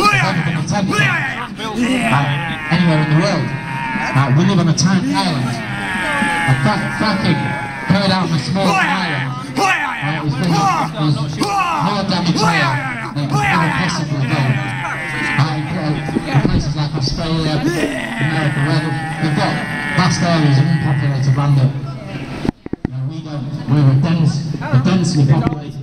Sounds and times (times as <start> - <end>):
Outside, urban or manmade: 0.0 - 25.8
Speech: 0.0 - 25.8.